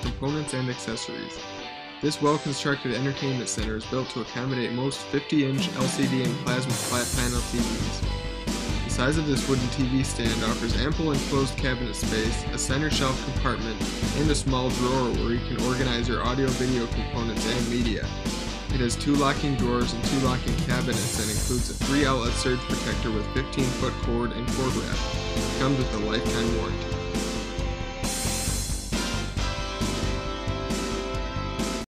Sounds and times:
Speech: 0.0s - 1.4s, 2.0s - 8.0s, 8.8s - 18.1s, 18.7s - 25.0s, 25.6s - 26.8s
Music: 0.0s - 31.8s.

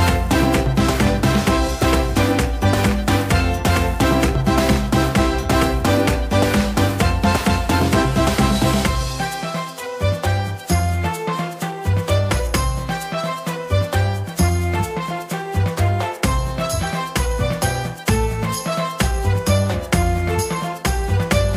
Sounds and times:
Music: 0.0s - 21.5s.

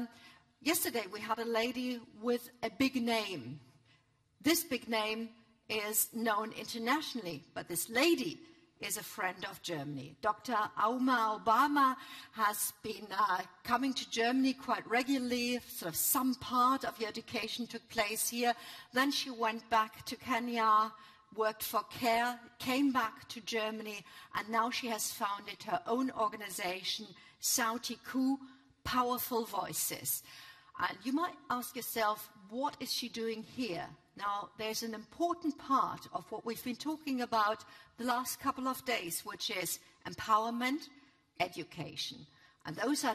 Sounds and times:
Narration, monologue: 0.0s - 43.1s
Female speech, woman speaking: 0.7s - 3.5s, 4.5s - 30.2s, 30.8s - 43.1s.

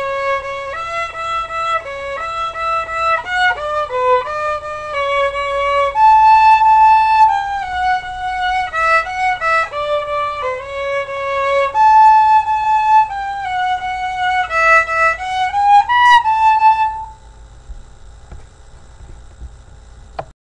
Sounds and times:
Violin, fiddle: 0.0s - 17.2s.

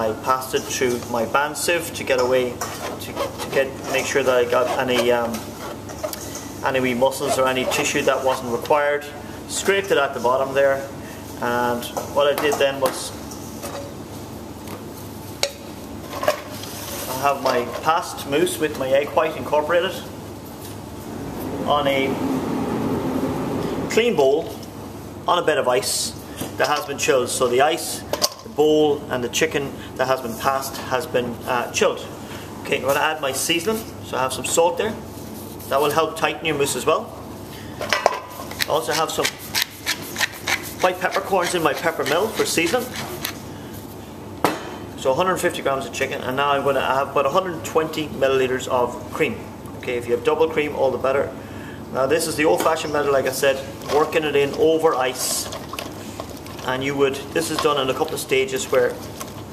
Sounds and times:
Speech: 0.0s - 5.4s, 6.6s - 13.2s, 17.1s - 20.1s, 21.6s - 22.2s, 23.9s - 24.6s, 25.2s - 35.0s, 35.7s - 37.2s, 38.7s - 39.4s, 40.8s - 43.0s, 45.0s - 55.6s, 56.6s - 59.0s.

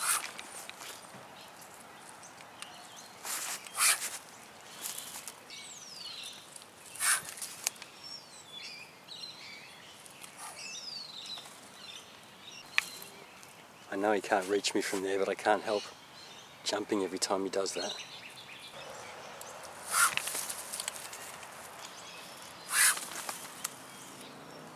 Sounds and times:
Outside, rural or natural: 0.0s - 24.7s
Speech: 13.9s - 15.9s, 16.6s - 18.0s.

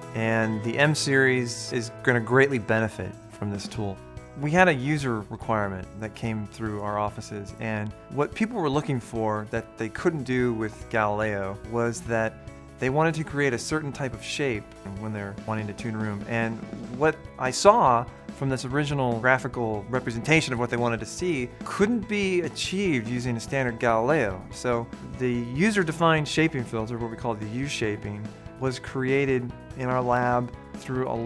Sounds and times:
Music: 0.0s - 31.2s
Speech: 0.2s - 31.2s.

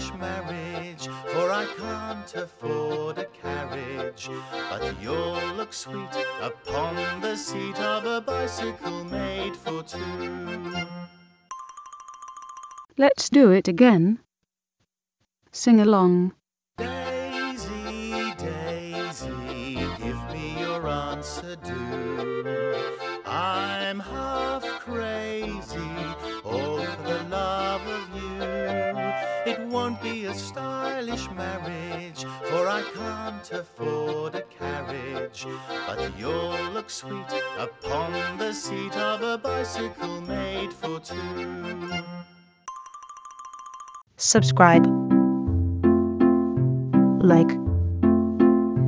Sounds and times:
Music: 0.0s - 11.1s, 16.8s - 42.9s, 43.9s - 48.8s
Speech: 13.0s - 14.2s, 15.6s - 16.3s, 44.2s - 44.9s, 47.2s - 47.6s.

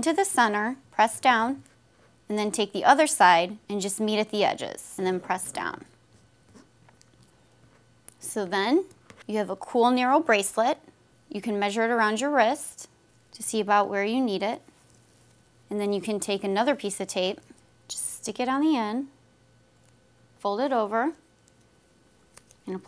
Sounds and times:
Speech: 0.0s - 1.6s, 2.3s - 5.9s, 8.2s - 14.6s, 15.7s - 19.1s, 20.4s - 21.2s, 22.6s - 22.8s.

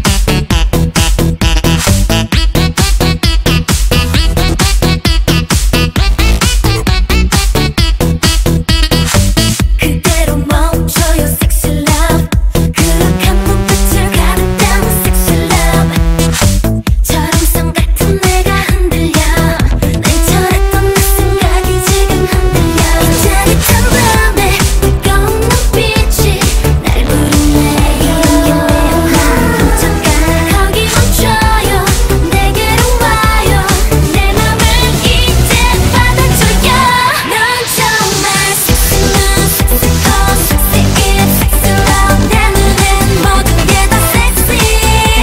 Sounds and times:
Music: 0.0s - 45.2s.

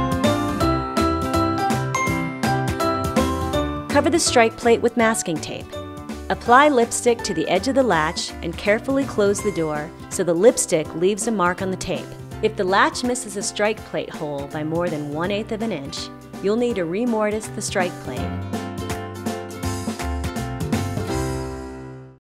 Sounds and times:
Music: 0.0s - 22.2s
Speech: 3.9s - 5.7s, 6.3s - 18.4s.

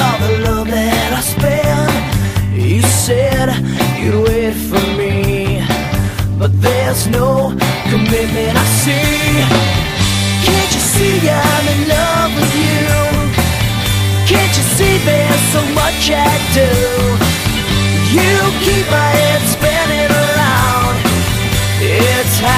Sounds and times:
Music: 0.0s - 22.5s.

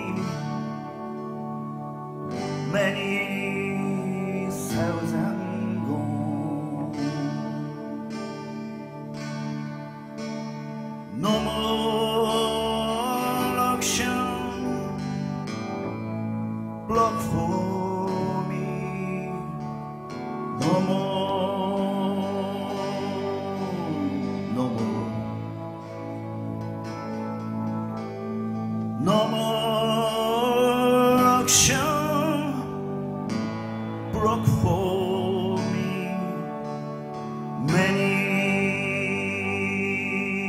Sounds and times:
Music: 0.0s - 40.4s.

